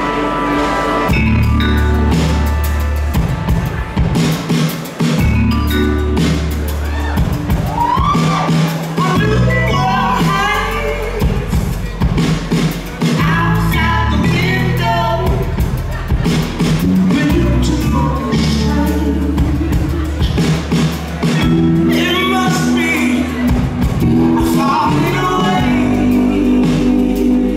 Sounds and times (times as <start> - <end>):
Music: 0.0 - 27.5.